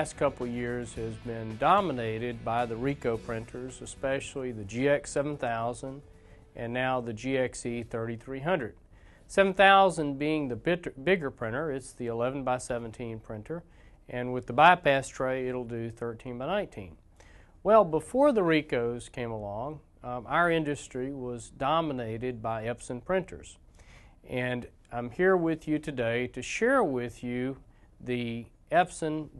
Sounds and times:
Speech: 0.0s - 6.0s, 6.6s - 17.0s, 17.6s - 23.6s, 24.3s - 29.3s.

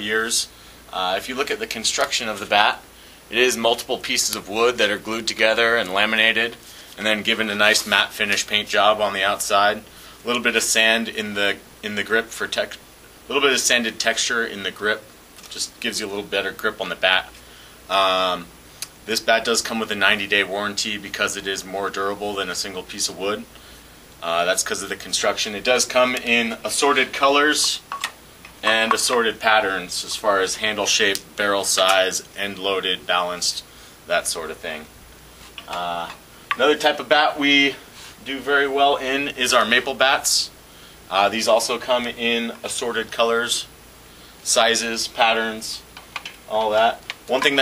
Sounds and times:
Speech: 0.0s - 23.5s, 24.2s - 27.8s, 28.6s - 34.9s, 35.7s - 43.7s, 44.4s - 45.9s, 46.5s - 47.6s.

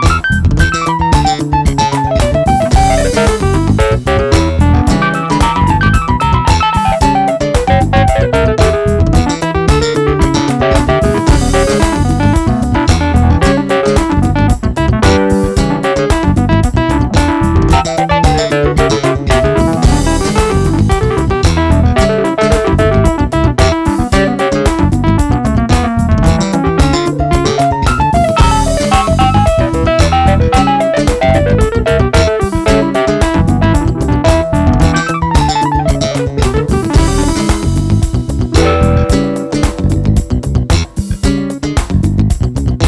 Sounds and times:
Electric piano: 0.0s - 42.8s.

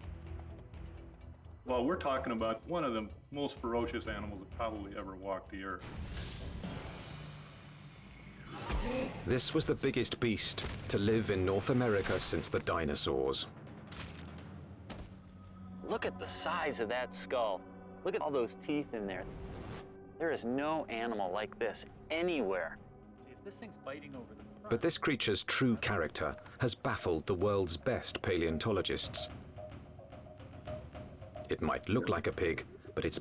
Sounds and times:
Music: 0.0s - 33.2s
Speech: 1.7s - 5.8s, 9.3s - 13.5s, 15.8s - 19.3s, 20.2s - 29.3s, 31.5s - 33.2s.

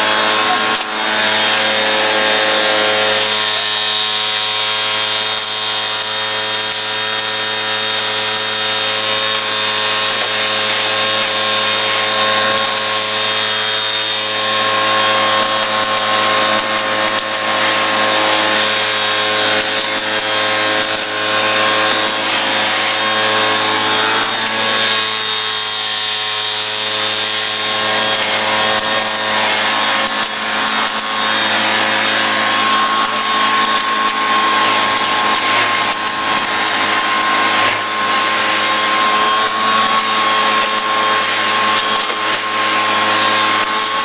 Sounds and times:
Vacuum cleaner: 0.0s - 44.0s.

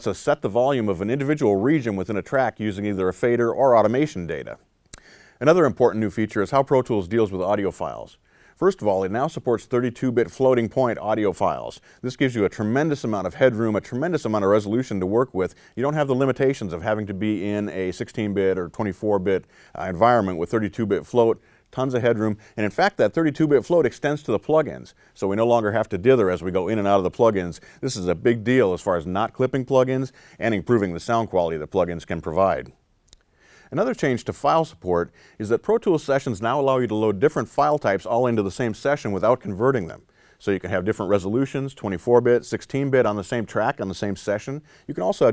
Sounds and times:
Speech: 0.0s - 4.7s, 5.4s - 32.8s, 33.7s - 45.3s.

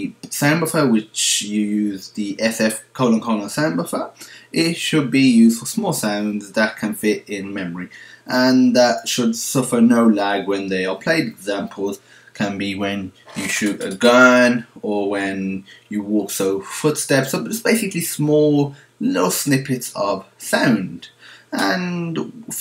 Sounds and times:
Speech: 0.0s - 22.6s.

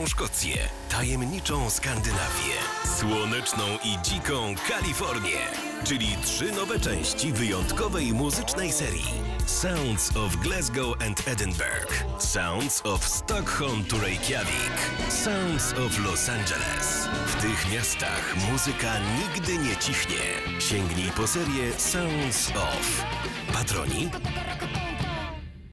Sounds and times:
Speech: 0.0s - 24.3s
Music: 0.0s - 25.7s.

